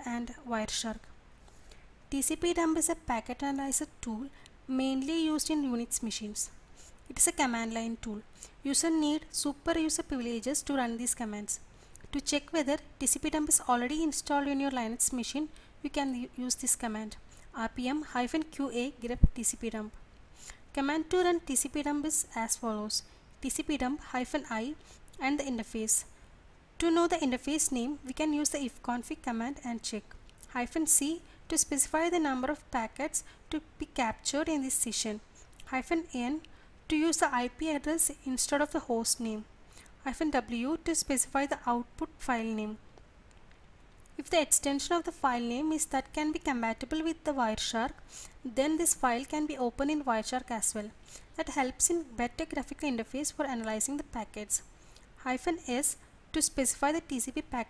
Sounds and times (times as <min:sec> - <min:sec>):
Speech: 0:00.0 - 0:01.1, 0:02.1 - 0:06.5, 0:07.1 - 0:20.0, 0:20.8 - 0:26.1, 0:26.8 - 0:42.8, 0:44.2 - 0:54.6, 0:55.2 - 0:57.7.